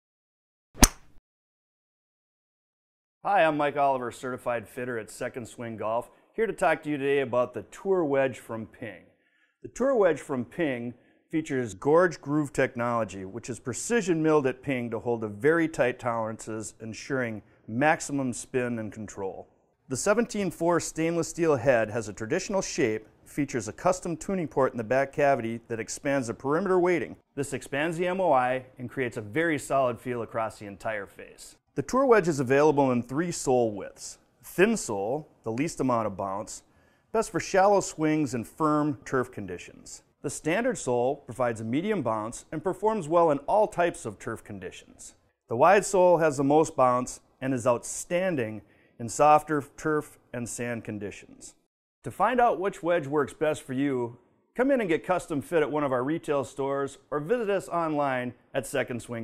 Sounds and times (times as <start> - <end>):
Speech: 3.2 - 59.2.